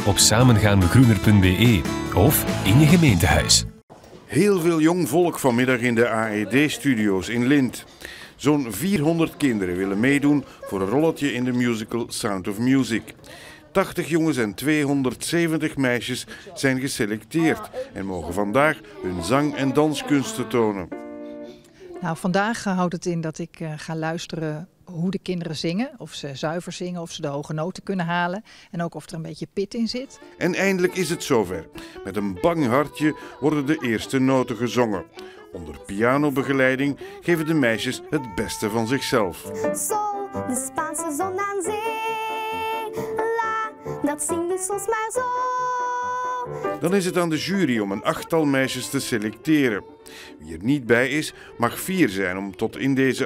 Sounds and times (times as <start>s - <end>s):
Speech: 0.0s - 3.7s, 4.3s - 20.9s, 22.0s - 39.4s
Tender music: 0.0s - 3.8s, 30.2s - 35.8s, 36.9s - 52.7s.